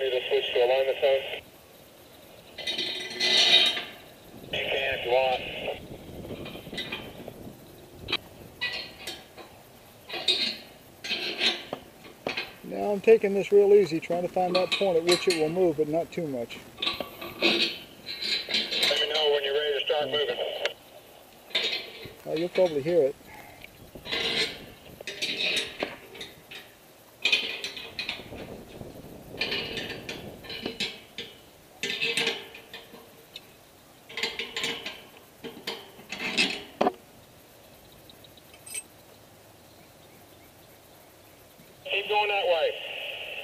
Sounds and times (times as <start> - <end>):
Speech: 0.0 - 1.4, 4.6 - 5.8, 12.7 - 16.6, 18.8 - 20.7, 22.2 - 23.2, 41.9 - 42.9.